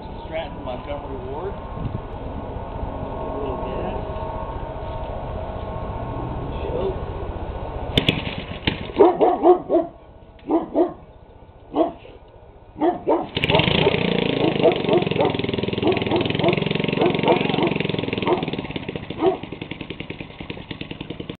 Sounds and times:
Engine starting: 8.0s - 9.1s, 13.2s - 15.9s.

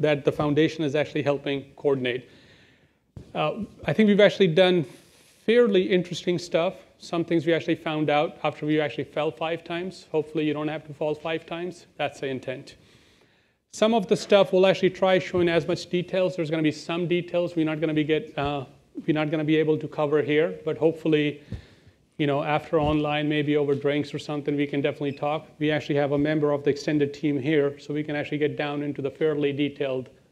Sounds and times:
Speech: 0.0s - 2.3s, 3.2s - 12.8s, 13.7s - 21.4s, 22.2s - 30.2s.

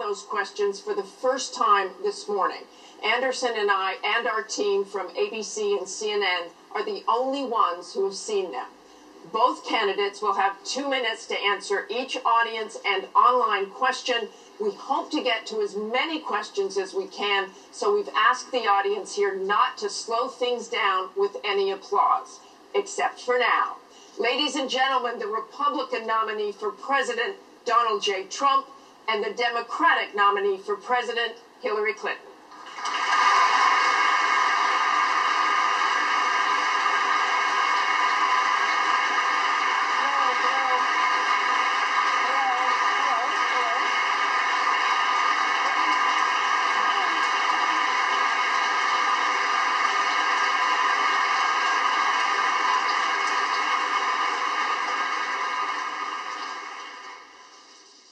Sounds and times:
Speech: 0.0s - 8.7s, 9.3s - 32.3s, 40.0s - 40.9s, 42.2s - 43.9s.

